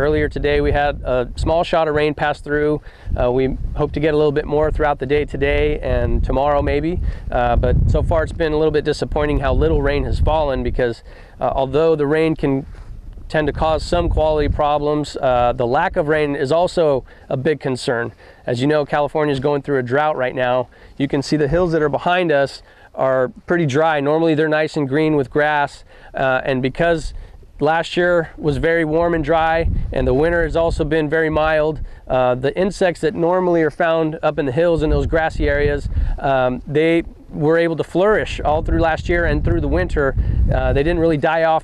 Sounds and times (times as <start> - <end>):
Speech: 0.0 - 12.7, 13.3 - 41.6.